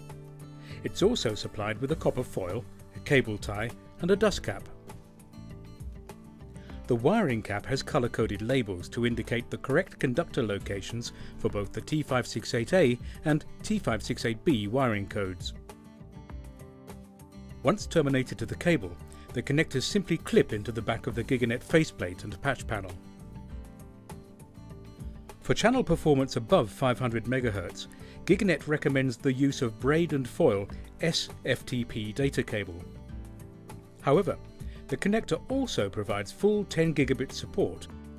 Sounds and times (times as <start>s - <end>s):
Music: 0.0s - 38.1s
Speech: 0.8s - 4.8s, 6.9s - 15.6s, 17.6s - 23.0s, 25.4s - 32.9s, 34.0s - 37.9s.